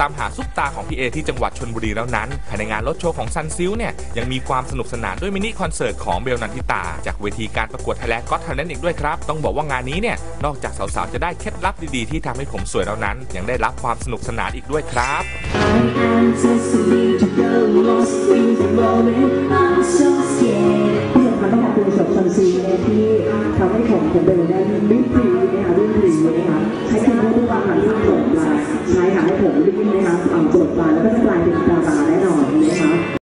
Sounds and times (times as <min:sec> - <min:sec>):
Speech: 0:00.0 - 0:15.3, 0:21.2 - 0:33.2
Music: 0:00.0 - 0:33.2.